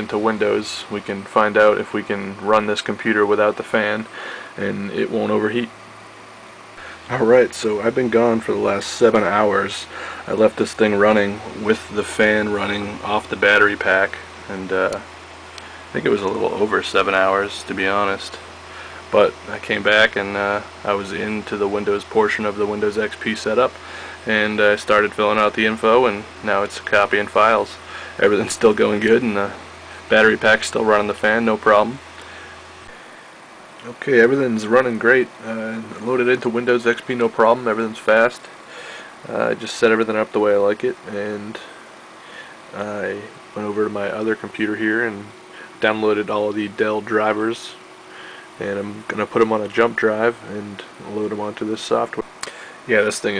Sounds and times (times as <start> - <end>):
Speech: 0.0 - 5.8, 7.1 - 15.1, 15.9 - 18.5, 19.1 - 32.0, 33.8 - 38.5, 39.2 - 41.8, 42.7 - 47.8, 48.6 - 52.3, 52.9 - 53.3
Inside, small room: 0.0 - 53.3.